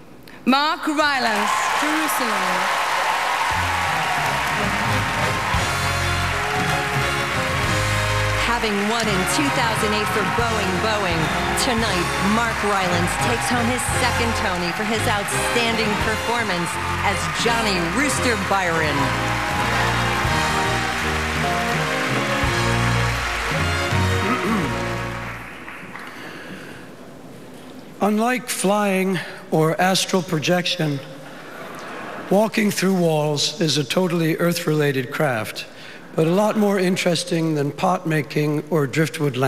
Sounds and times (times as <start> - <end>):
Narration, monologue: 27.7 - 39.4
Male speech, man speaking: 28.0 - 31.1, 32.3 - 39.4.